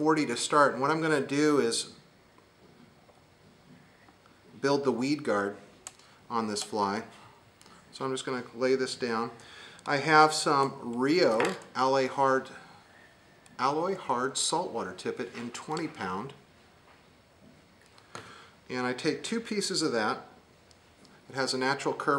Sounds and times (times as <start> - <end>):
Speech: 0.0 - 2.0, 4.6 - 5.7, 6.3 - 7.1, 7.9 - 12.6, 13.6 - 16.4, 18.7 - 20.4, 21.3 - 22.1.